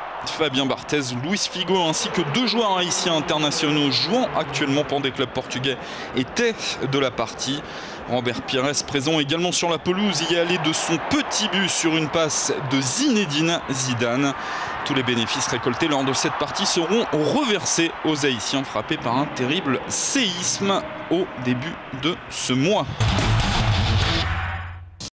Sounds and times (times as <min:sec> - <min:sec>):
Speech: 0:00.3 - 0:23.0
Music: 0:22.9 - 0:25.1.